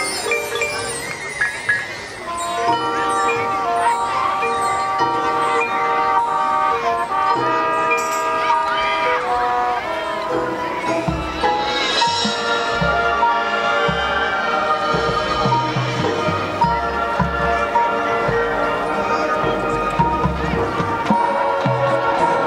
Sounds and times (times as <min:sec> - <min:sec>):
Tender music: 0:00.0 - 0:22.4.